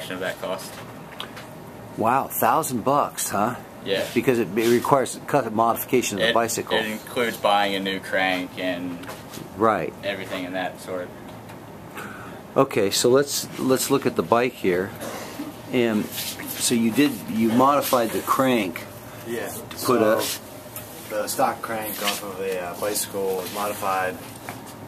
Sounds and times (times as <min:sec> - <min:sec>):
Speech: 0:02.0 - 0:09.0, 0:09.6 - 0:11.1, 0:15.7 - 0:20.4, 0:21.1 - 0:24.2.